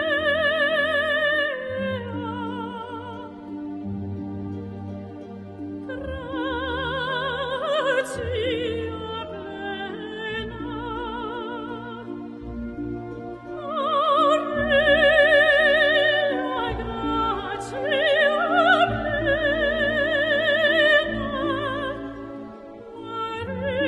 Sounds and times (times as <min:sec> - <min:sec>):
Music: 0:00.0 - 0:23.8.